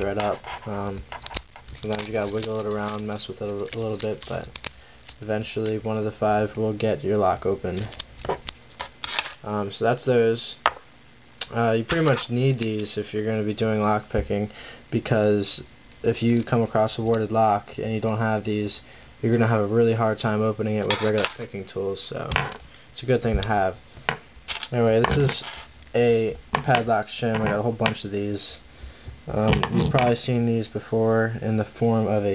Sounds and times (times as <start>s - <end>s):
Speech: 0.0s - 1.0s, 1.8s - 4.5s, 5.2s - 7.9s, 9.4s - 10.6s, 11.4s - 22.4s, 23.0s - 23.8s, 24.7s - 25.4s, 26.0s - 28.6s, 29.3s - 32.3s.